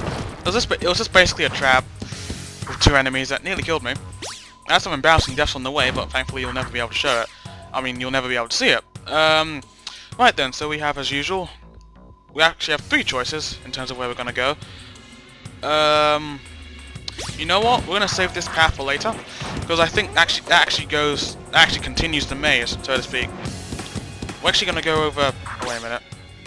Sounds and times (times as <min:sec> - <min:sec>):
Music: 0:00.0 - 0:26.4
Speech: 0:00.5 - 0:01.8, 0:02.8 - 0:04.0, 0:04.7 - 0:09.6, 0:10.2 - 0:11.6, 0:12.4 - 0:14.6, 0:15.6 - 0:16.4, 0:17.4 - 0:23.3, 0:24.4 - 0:26.0.